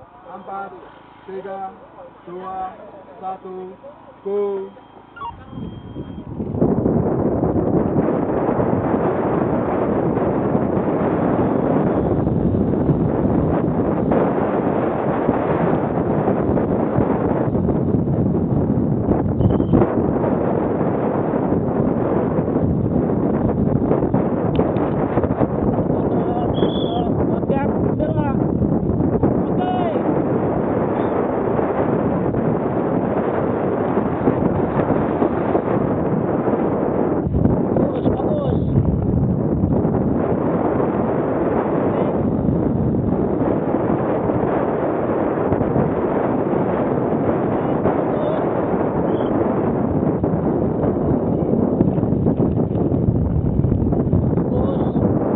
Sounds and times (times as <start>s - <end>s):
Speech: 0.2s - 4.8s, 26.0s - 28.4s, 29.5s - 30.0s, 37.8s - 38.8s, 48.1s - 48.4s, 54.5s - 55.0s.